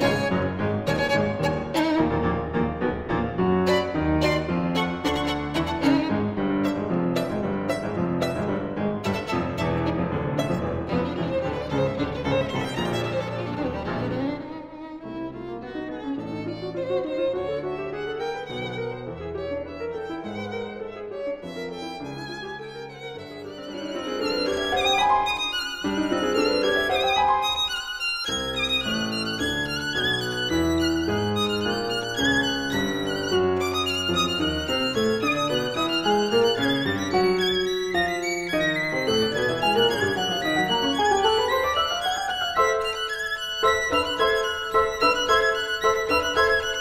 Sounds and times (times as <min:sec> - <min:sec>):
Violin, fiddle: 0:00.0 - 0:46.8.